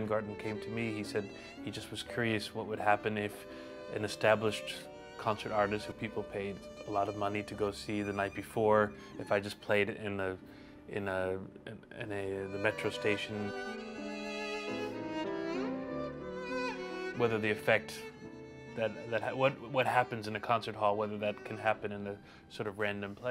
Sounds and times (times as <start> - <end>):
Speech: 0.0 - 13.5, 17.2 - 18.1, 18.8 - 23.3
Music: 0.0 - 23.3.